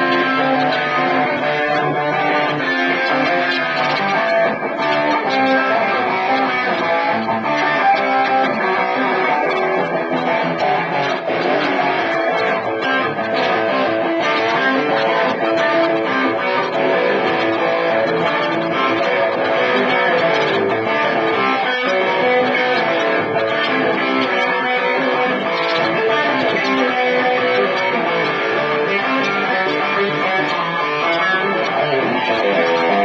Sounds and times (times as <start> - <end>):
Electric guitar: 0.0 - 33.0.